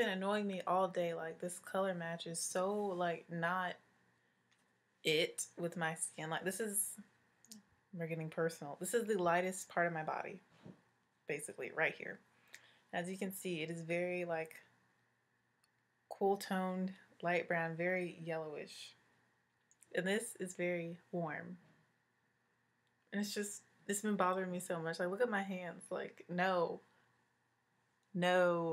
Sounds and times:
Speech: 0:00.0 - 0:03.8, 0:05.1 - 0:07.0, 0:08.0 - 0:10.4, 0:11.3 - 0:12.2, 0:13.0 - 0:14.6, 0:16.1 - 0:19.0, 0:19.9 - 0:21.6, 0:23.2 - 0:26.8, 0:28.2 - 0:28.7.

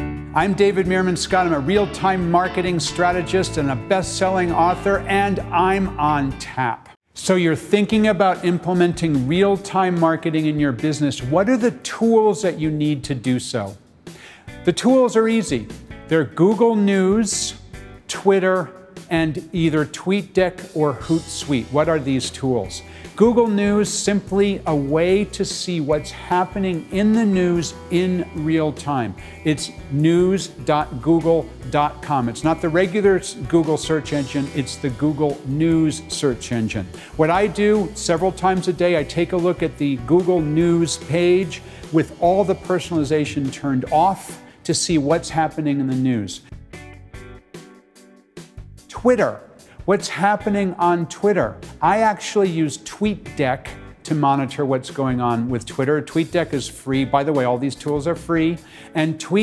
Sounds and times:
Music: 0:00.0 - 0:59.4
Speech: 0:00.4 - 0:13.8, 0:14.7 - 0:46.4, 0:48.9 - 0:59.4.

